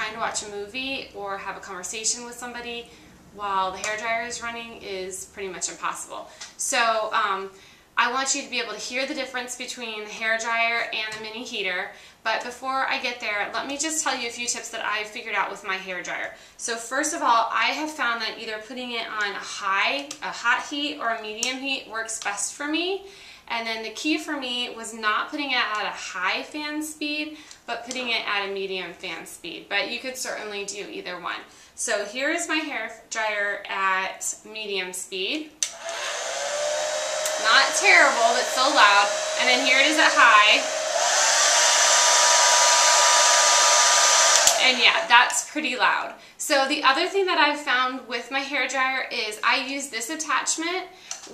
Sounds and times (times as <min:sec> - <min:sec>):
Hair dryer: 0:35.7 - 0:45.4.